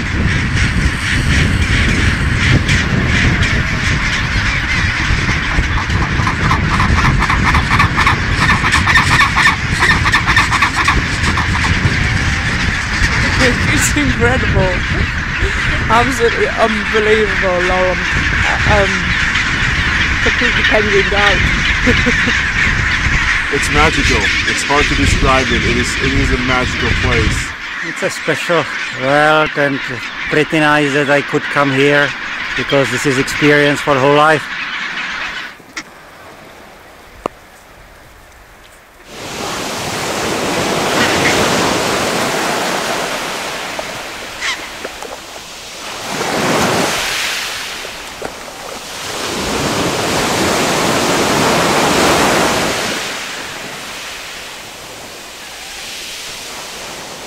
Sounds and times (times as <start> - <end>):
Goose: 0.0 - 36.0, 38.6 - 45.2, 55.3 - 56.7
Bird: 0.0 - 36.7, 40.5 - 55.9
Outside, rural or natural: 0.0 - 57.2
Speech: 13.2 - 14.8, 15.4 - 19.1, 20.2 - 22.3, 23.5 - 34.5.